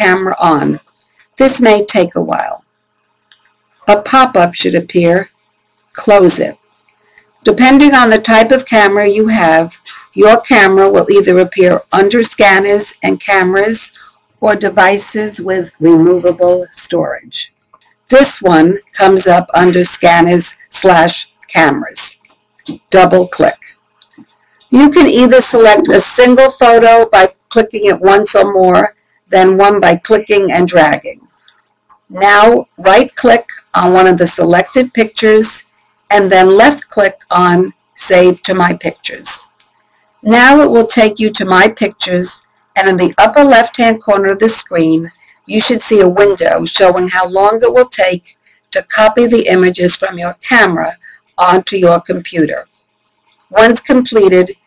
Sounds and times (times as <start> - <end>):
Speech: 0.0 - 2.6, 3.8 - 5.3, 6.0 - 6.6, 7.4 - 17.5, 18.1 - 31.2, 32.1 - 39.6, 40.2 - 52.8, 53.5 - 54.6.